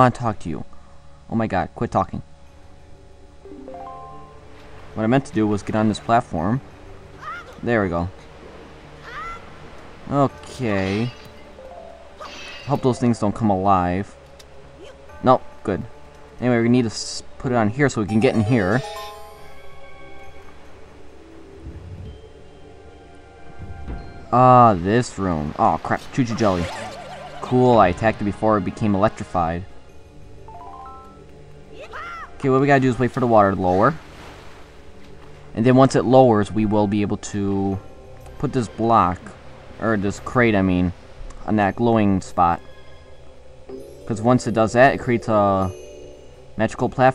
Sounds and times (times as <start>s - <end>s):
Speech: 0.0s - 0.7s, 1.3s - 2.3s, 5.0s - 6.6s, 10.1s - 11.2s, 12.7s - 14.1s, 14.8s - 18.9s, 24.4s - 29.7s, 31.8s - 34.0s, 35.6s - 37.8s, 38.4s - 42.6s, 44.1s - 45.8s, 46.6s - 47.1s.